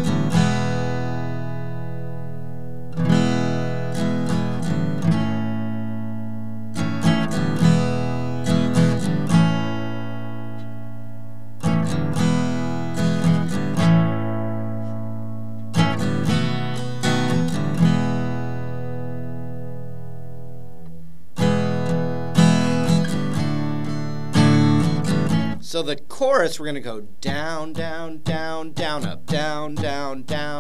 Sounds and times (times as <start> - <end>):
Acoustic guitar: 0.0 - 30.6.